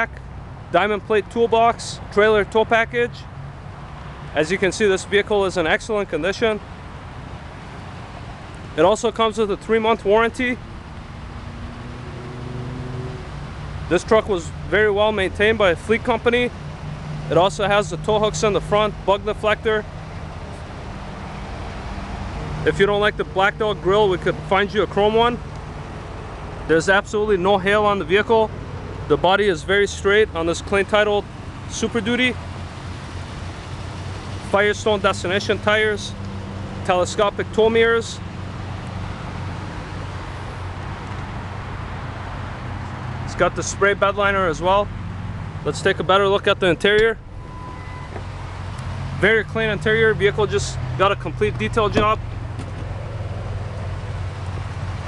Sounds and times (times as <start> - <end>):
Speech: 0.0 - 3.3, 4.4 - 6.6, 8.8 - 10.6, 13.9 - 16.6, 17.3 - 19.9, 22.6 - 25.4, 26.7 - 28.5, 29.1 - 32.4, 34.5 - 36.2, 36.8 - 38.2, 43.3 - 44.9, 45.7 - 47.2, 49.2 - 52.2.